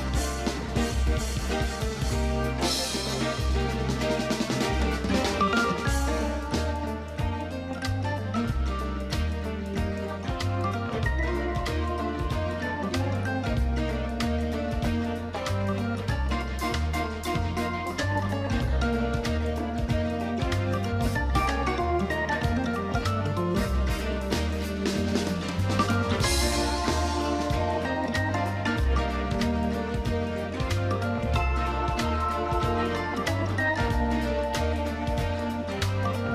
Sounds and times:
Plucked string instrument: 0.0 - 36.3.

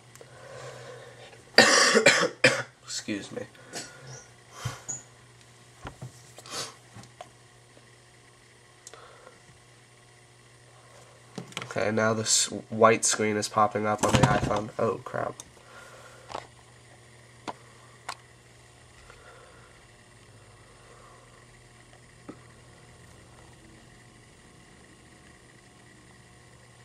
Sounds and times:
Speech: 2.9 - 3.5, 11.7 - 15.4.

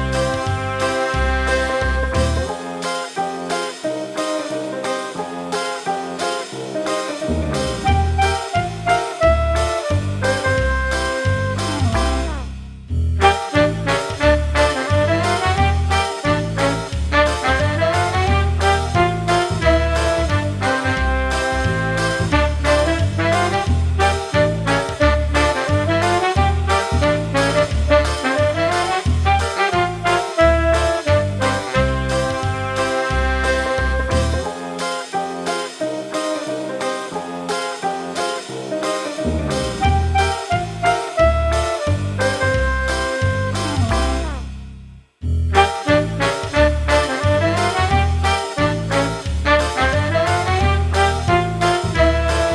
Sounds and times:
Music: 0.0 - 52.5.

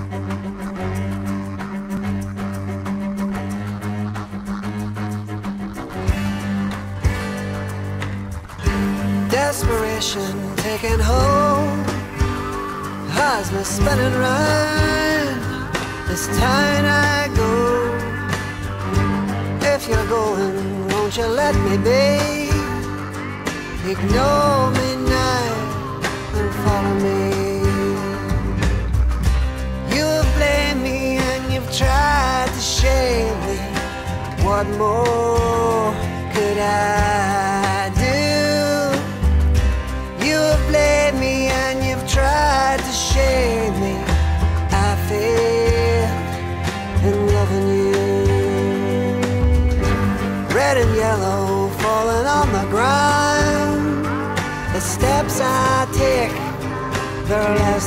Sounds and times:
Independent music: 0.0 - 57.8.

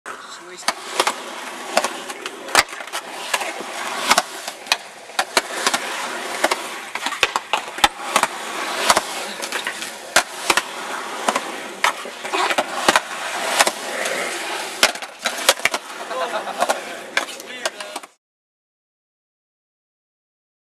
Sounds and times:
Outside, urban or manmade: 0.0 - 18.2
Speech: 0.2 - 0.7, 17.4 - 18.0.

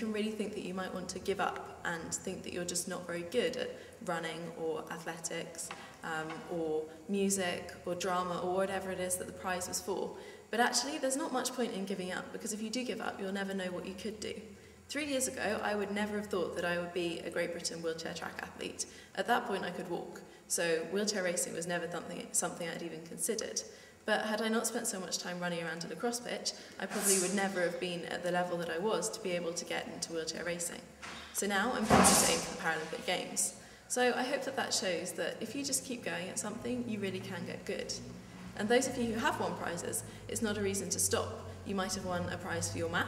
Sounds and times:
Female speech, woman speaking: 0.0 - 43.0
Narration, monologue: 0.0 - 43.0.

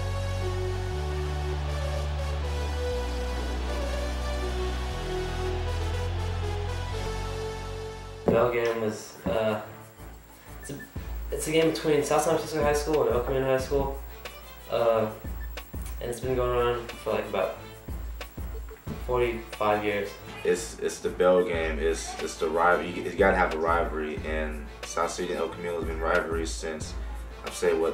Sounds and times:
Music: 0.0 - 27.9
Speech: 8.3 - 9.7, 10.7 - 14.0, 14.7 - 15.2, 16.0 - 17.7, 19.0 - 27.9.

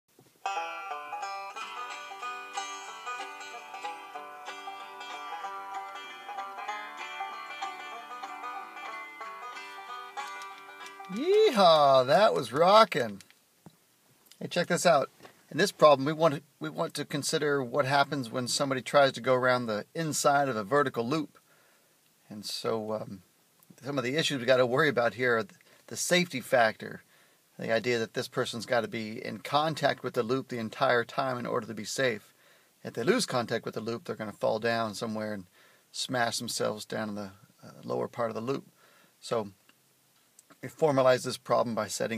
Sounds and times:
Banjo: 0.4 - 13.2.

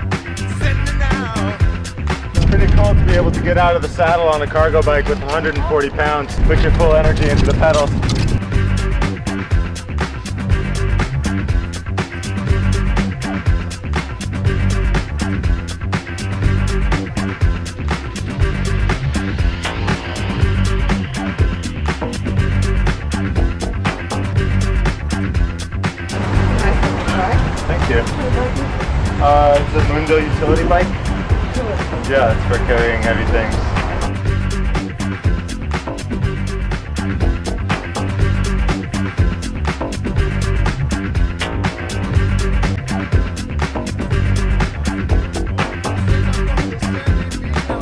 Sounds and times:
Music: 0.0 - 47.8.

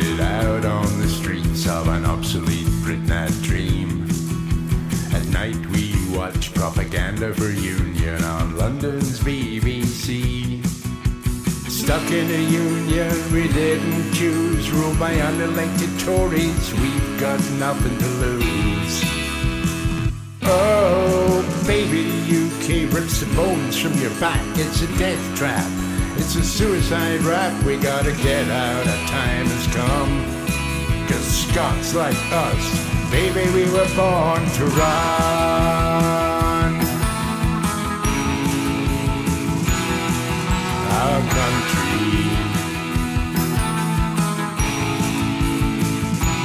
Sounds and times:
Bluegrass: 0.0 - 46.4.

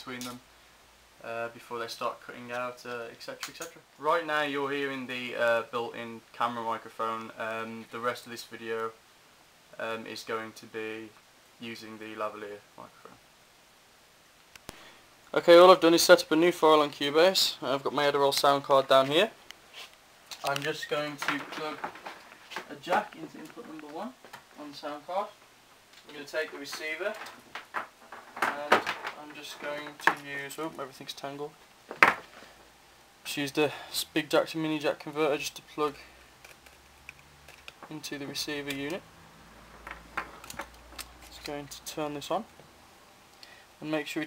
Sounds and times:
Speech: 0.0 - 0.4, 1.2 - 9.0, 9.8 - 13.2, 15.3 - 19.4, 20.4 - 21.9, 22.6 - 25.4, 26.0 - 27.3, 28.4 - 31.6, 33.2 - 36.1, 37.9 - 39.0, 41.3 - 42.5, 43.8 - 44.2.

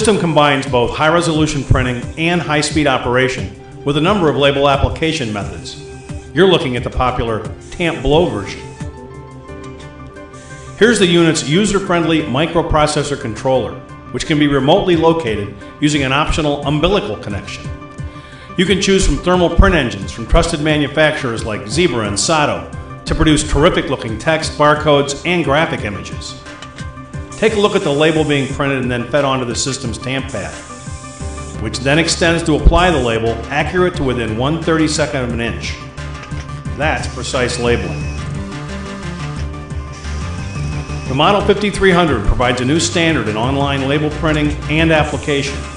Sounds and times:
Speech: 0.0 - 5.8, 6.4 - 8.6, 10.8 - 17.7, 18.6 - 26.4, 27.4 - 30.6, 31.6 - 35.8, 36.8 - 38.0, 41.1 - 45.6
Music: 0.0 - 45.7.

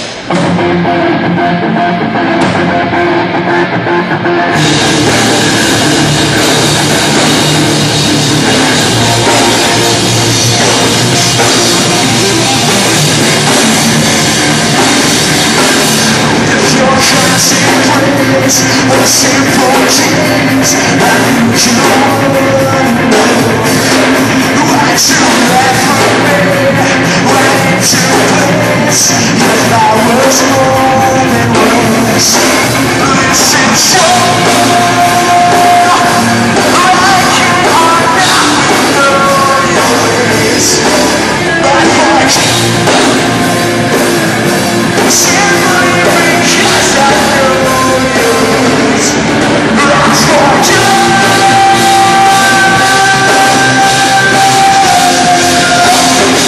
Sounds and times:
Heavy metal: 0.0 - 56.4
Punk rock: 0.0 - 56.4.

